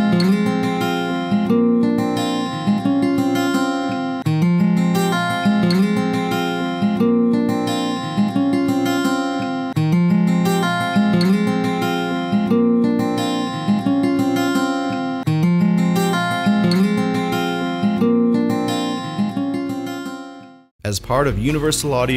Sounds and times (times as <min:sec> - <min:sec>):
Acoustic guitar: 0:00.0 - 0:20.7.